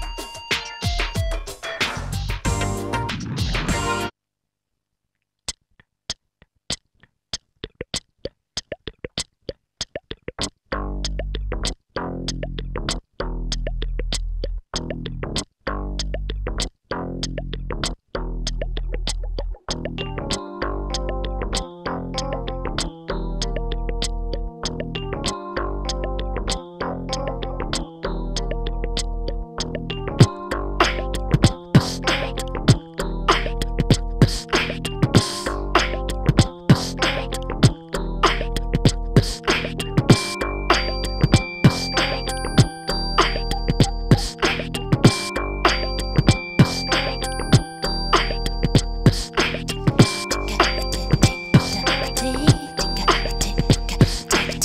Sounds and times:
Music: 0:00.0 - 0:04.2, 0:10.4 - 0:54.6.

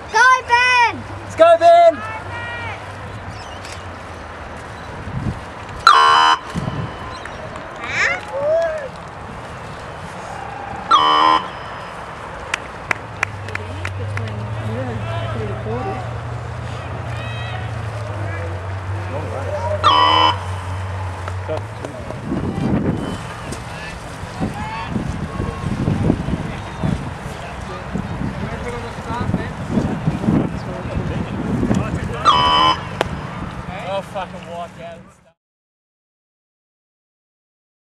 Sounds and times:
Rowboat, canoe, kayak: 0:00.0 - 0:35.4.

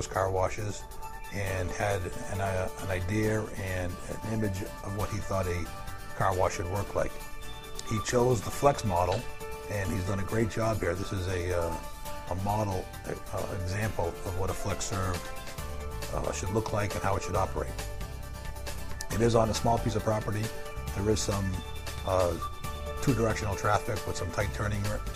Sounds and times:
Speech: 0:00.0 - 0:00.8, 0:01.4 - 0:07.1, 0:07.8 - 0:15.2, 0:16.1 - 0:17.8, 0:19.1 - 0:25.1
Music: 0:00.0 - 0:25.1.

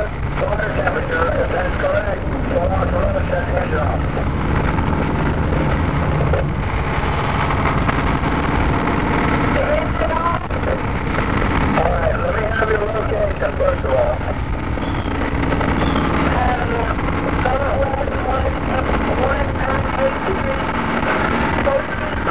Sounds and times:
Speech: 0:00.0 - 0:04.1, 0:09.5 - 0:10.8, 0:11.8 - 0:14.4, 0:16.3 - 0:20.8, 0:21.6 - 0:22.3
Vehicle: 0:00.0 - 0:22.3.

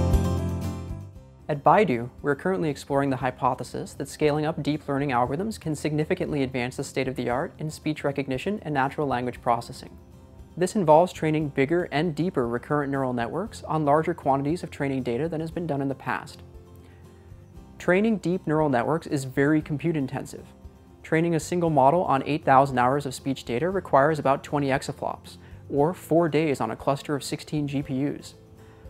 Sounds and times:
Music: 0:00.0 - 0:28.8
Speech: 0:01.5 - 0:10.0, 0:10.6 - 0:16.4, 0:17.8 - 0:28.4.

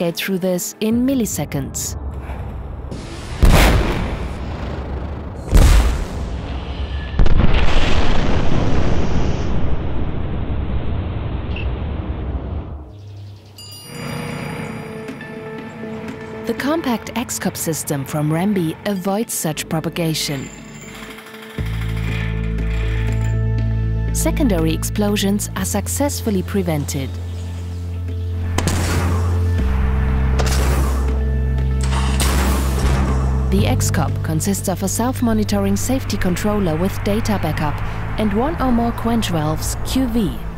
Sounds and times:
Speech: 0:00.0 - 0:02.0, 0:16.5 - 0:20.5, 0:24.2 - 0:27.2, 0:33.5 - 0:40.5
Music: 0:00.0 - 0:04.0, 0:12.8 - 0:40.5
Explosion: 0:02.0 - 0:12.9.

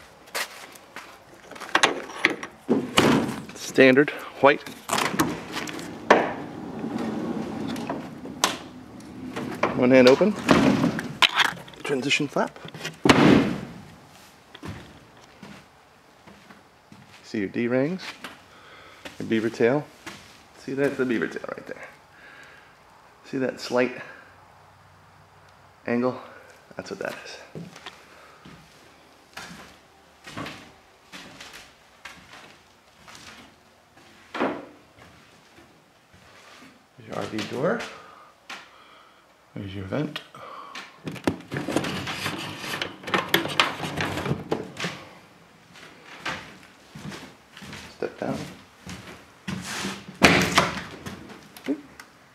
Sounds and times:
Speech: 0:03.6 - 0:04.7, 0:09.7 - 0:10.4, 0:11.8 - 0:12.6, 0:17.2 - 0:18.2, 0:19.2 - 0:20.0, 0:20.6 - 0:22.0, 0:23.2 - 0:24.2, 0:25.8 - 0:27.6, 0:37.0 - 0:38.0, 0:39.6 - 0:40.3, 0:47.9 - 0:48.6.

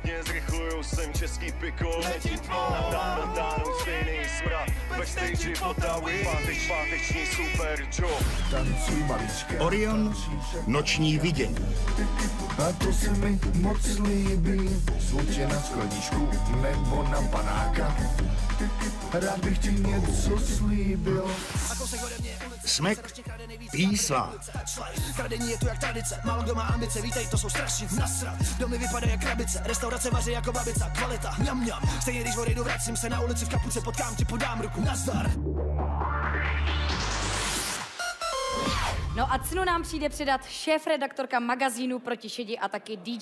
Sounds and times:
Music: 0:00.0 - 0:42.9
Speech: 0:08.8 - 0:11.6, 0:23.7 - 0:24.4.

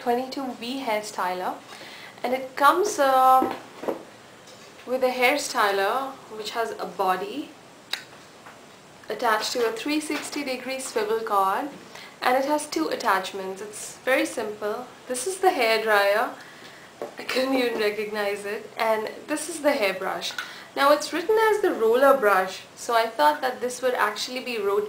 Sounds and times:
Speech: 0:00.0 - 0:01.6, 0:02.2 - 0:03.6, 0:04.9 - 0:07.6, 0:09.1 - 0:16.4, 0:17.2 - 0:24.8.

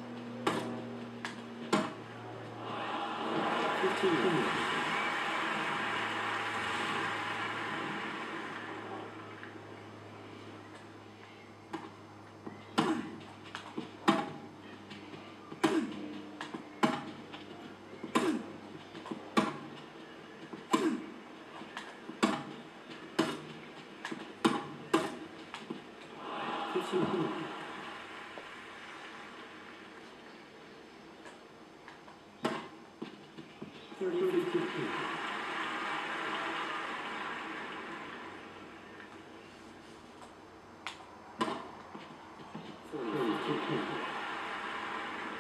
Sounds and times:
Speech: 0:02.1 - 0:05.1, 0:26.2 - 0:27.6, 0:33.8 - 0:35.1, 0:42.8 - 0:44.0.

